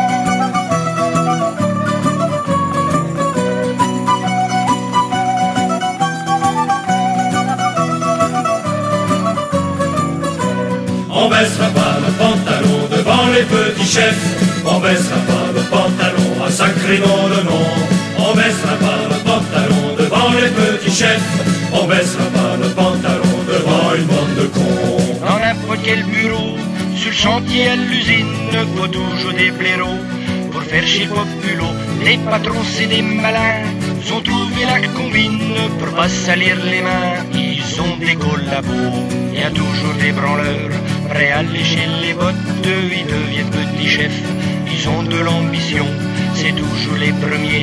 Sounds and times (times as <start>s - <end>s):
Music: 0.0s - 47.6s.